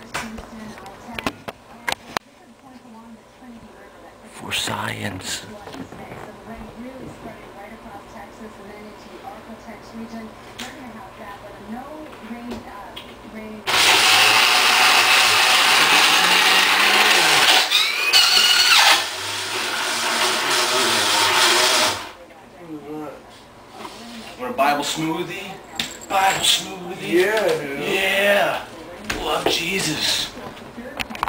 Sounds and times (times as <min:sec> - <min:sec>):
Blender: 0:13.7 - 0:22.2.